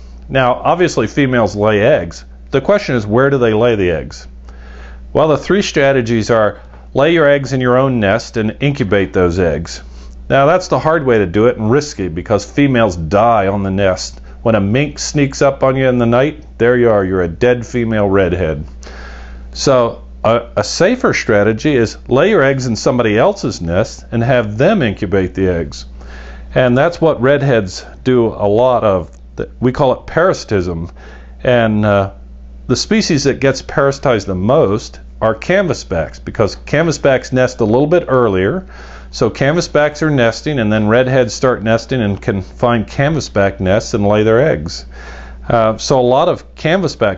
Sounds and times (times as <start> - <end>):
Speech: 0.3 - 4.3, 5.1 - 18.7, 19.6 - 25.9, 26.5 - 47.1.